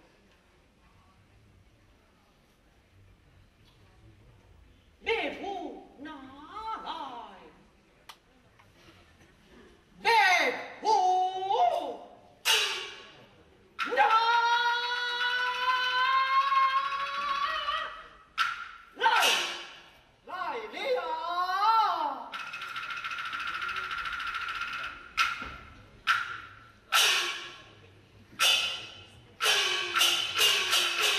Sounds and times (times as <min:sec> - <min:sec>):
Speech: 0:00.0 - 0:12.2, 0:20.2 - 0:22.3.